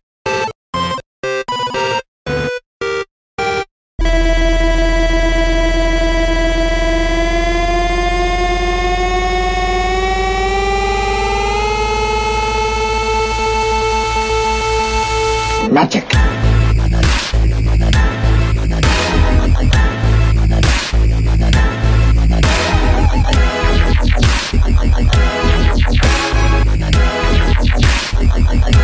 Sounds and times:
Music: 0:00.3 - 0:28.8
Speech: 0:15.6 - 0:16.2.

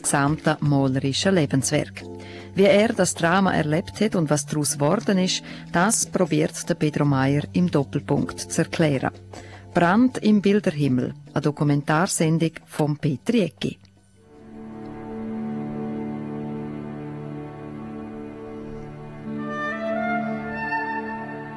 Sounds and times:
Speech: 0:00.0 - 0:09.2, 0:09.8 - 0:13.9
Music: 0:00.0 - 0:21.5.

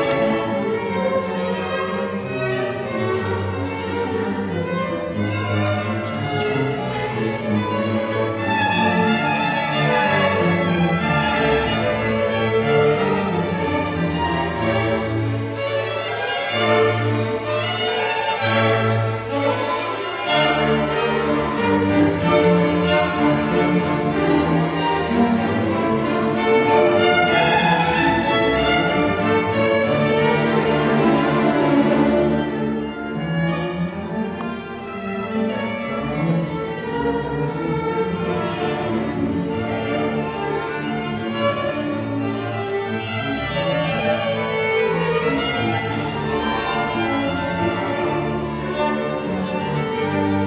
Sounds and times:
Violin, fiddle: 0:00.0 - 0:50.4.

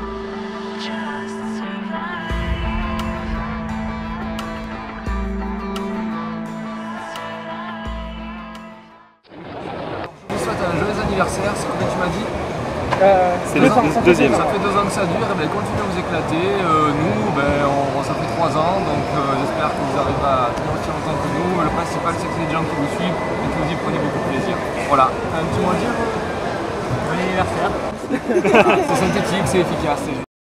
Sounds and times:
Speech: 0:13.1 - 0:26.0.

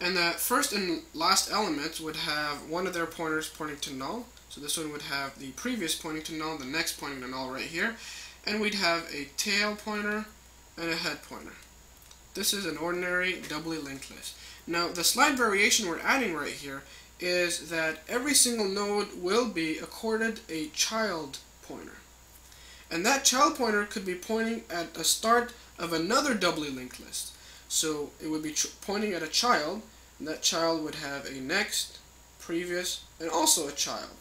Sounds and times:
Speech: 0:00.0 - 0:11.7, 0:12.4 - 0:22.1, 0:22.9 - 0:34.2.

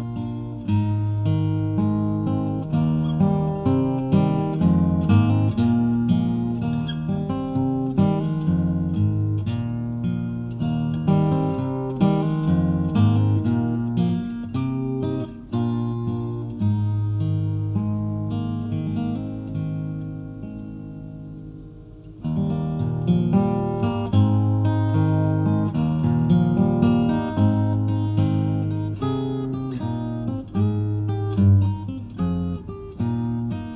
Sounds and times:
Strum: 0:00.0 - 0:33.7.

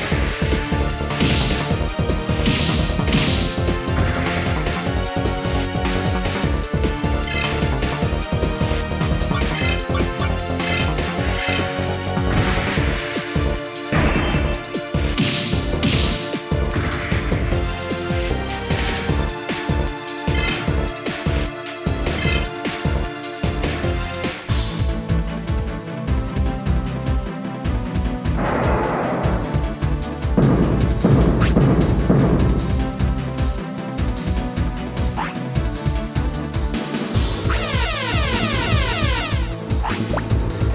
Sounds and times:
Music: 0:00.0 - 0:40.7.

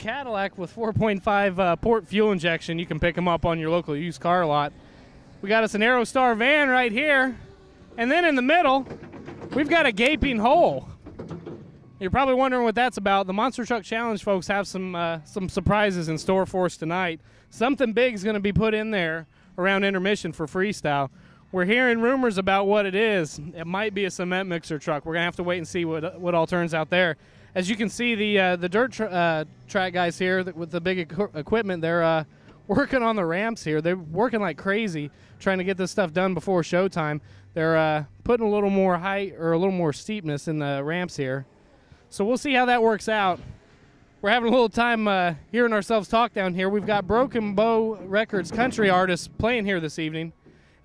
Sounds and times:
Speech: 0:00.0 - 0:04.7, 0:05.4 - 0:07.4, 0:08.0 - 0:08.9, 0:09.5 - 0:11.0, 0:12.0 - 0:41.4, 0:42.1 - 0:43.5, 0:44.2 - 0:50.4.

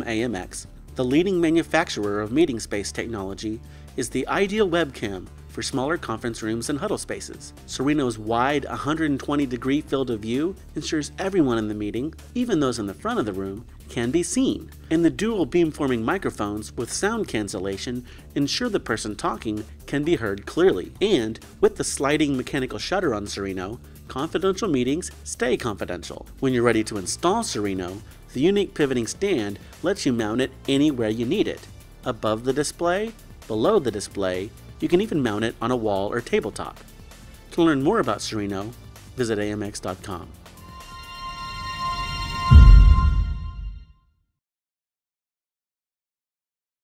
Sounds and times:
Speech: 0:00.0 - 0:36.8, 0:37.5 - 0:40.4
Music: 0:00.0 - 0:44.3.

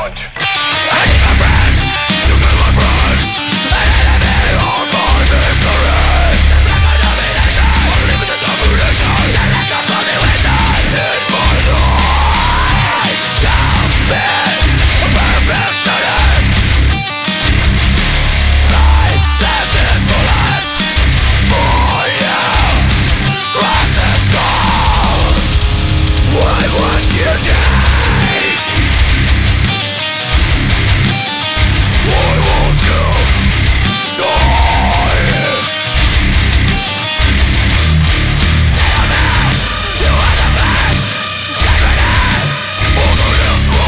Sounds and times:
Soundtrack music: 0:00.1 - 0:43.8.

